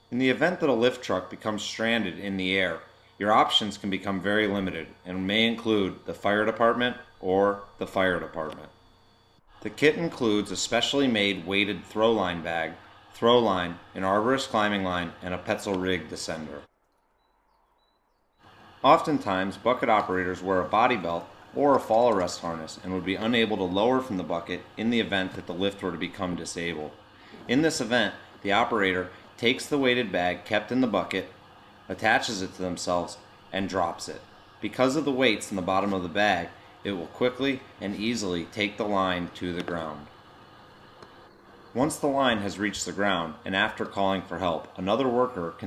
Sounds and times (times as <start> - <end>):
Speech: 0.1 - 8.8, 9.6 - 16.7, 18.8 - 31.3, 31.9 - 40.1, 41.8 - 45.6.